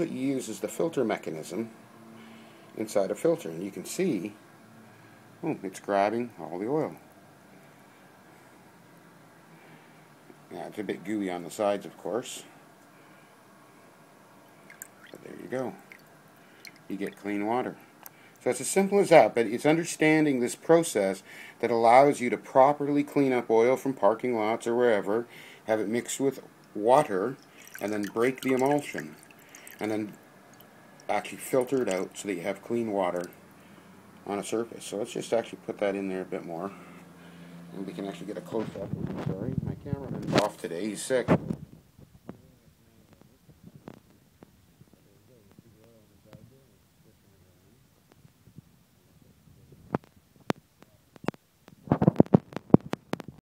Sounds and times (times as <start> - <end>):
Speech: 0.0 - 1.7, 2.8 - 4.4, 5.4 - 7.0, 10.5 - 12.6, 15.2 - 15.8, 16.9 - 17.8, 18.4 - 29.2, 29.8 - 30.2, 31.1 - 33.4, 34.2 - 36.8, 37.7 - 41.4, 45.0 - 47.8.